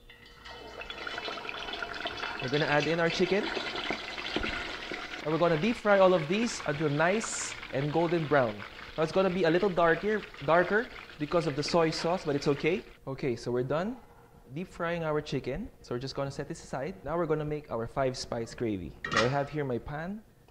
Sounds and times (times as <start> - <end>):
Frying (food): 0.0 - 13.0
Speech: 2.4 - 3.5, 5.2 - 20.3.